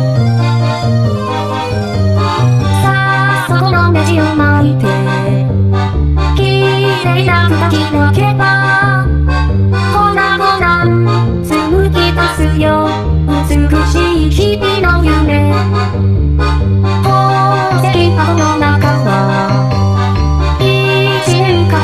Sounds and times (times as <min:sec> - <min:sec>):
Music: 0:00.0 - 0:21.8.